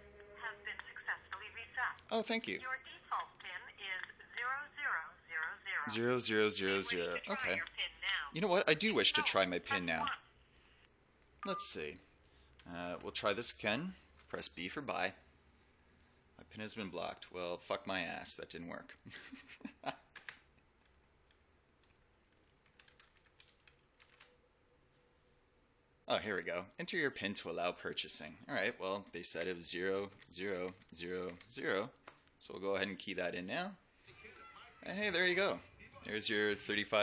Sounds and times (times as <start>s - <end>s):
Speech: 0.5s - 10.2s, 26.1s - 37.0s.